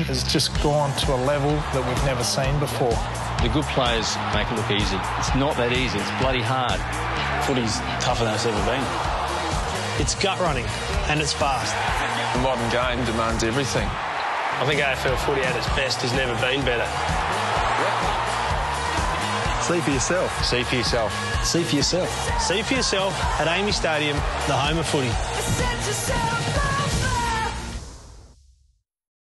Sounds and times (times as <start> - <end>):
Music: 0.0 - 28.8.